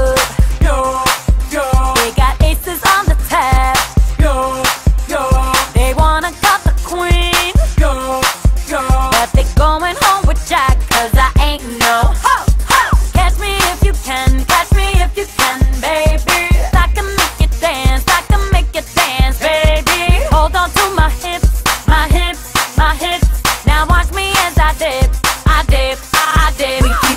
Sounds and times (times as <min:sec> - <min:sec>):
Music: 0:00.0 - 0:27.1.